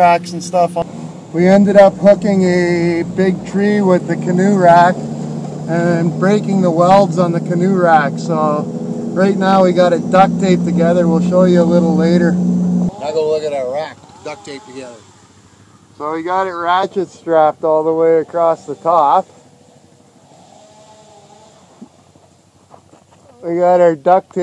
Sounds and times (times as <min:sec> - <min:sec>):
Speech: 0:00.0 - 0:00.8, 0:01.4 - 0:05.0, 0:05.7 - 0:08.6, 0:09.2 - 0:12.4, 0:16.0 - 0:19.3, 0:23.4 - 0:24.4
Outside, rural or natural: 0:00.0 - 0:24.4.